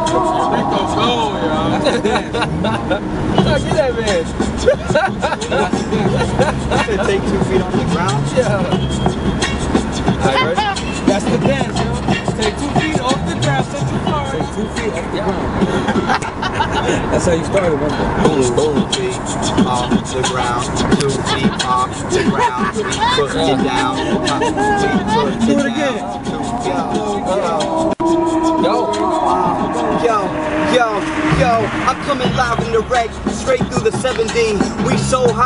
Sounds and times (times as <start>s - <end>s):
Speech: 0.0s - 4.3s, 5.4s - 8.8s, 10.2s - 11.8s, 17.0s - 27.8s, 28.5s - 35.4s
Music: 0.0s - 16.2s, 17.2s - 35.4s
Car: 0.0s - 35.4s.